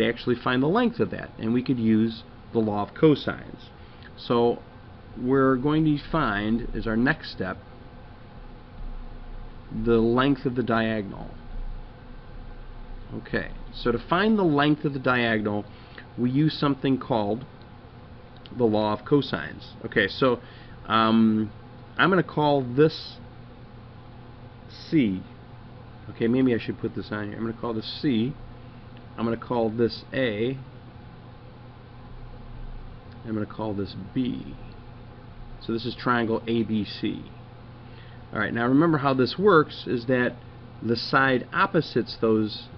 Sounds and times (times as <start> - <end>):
Speech: 0.0 - 4.6, 5.2 - 7.6, 9.7 - 11.4, 13.1 - 17.5, 18.5 - 23.3, 24.7 - 25.4, 26.1 - 28.4, 29.2 - 30.7, 33.2 - 34.7, 35.6 - 37.4, 38.3 - 42.7.